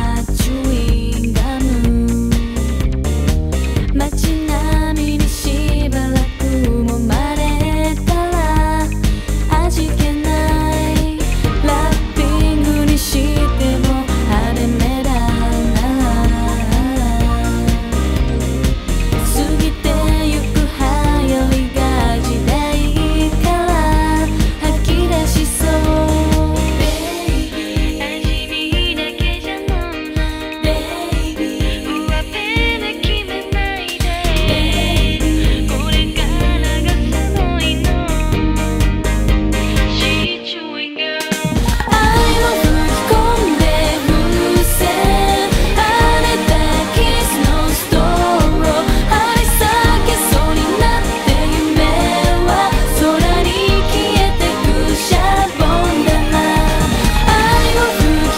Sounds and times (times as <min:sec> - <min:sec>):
Music: 0:00.0 - 0:58.3.